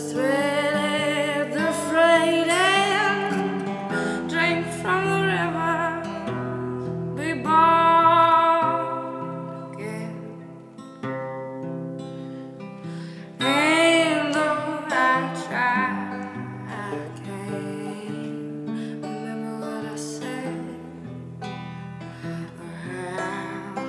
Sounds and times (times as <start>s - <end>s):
Music: 0.0s - 23.8s.